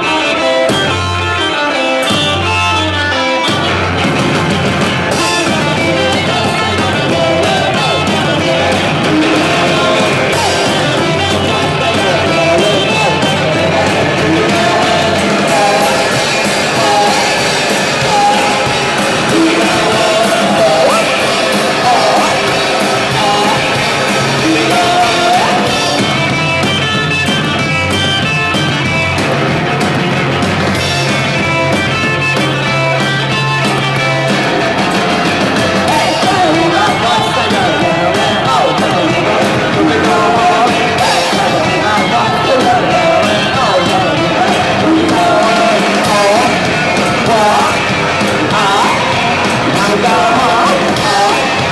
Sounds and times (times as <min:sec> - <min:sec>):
Music: 0:00.0 - 0:51.7.